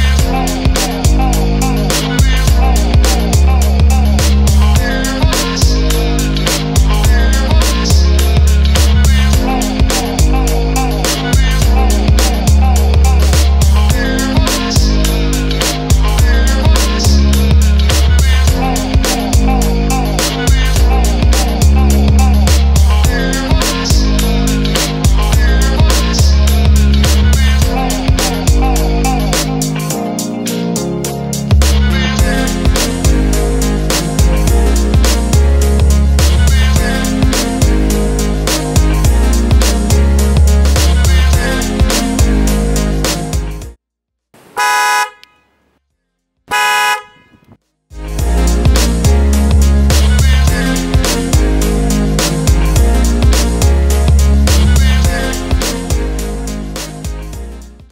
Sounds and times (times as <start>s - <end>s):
Music: 0.0s - 43.8s, 47.9s - 57.9s.